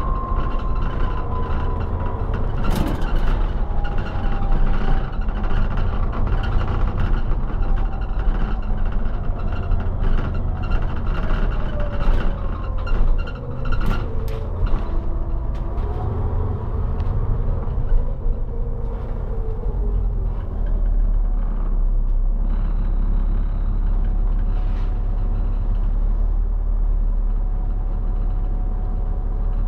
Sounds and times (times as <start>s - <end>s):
Bus: 0.0s - 29.6s.